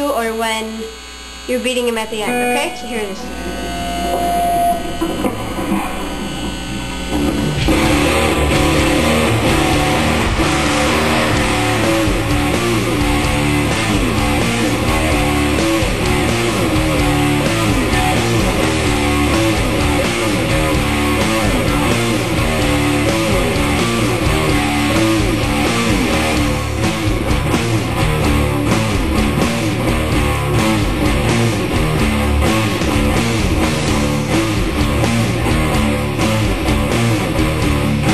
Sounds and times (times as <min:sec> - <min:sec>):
Electric guitar: 0:00.0 - 0:38.1.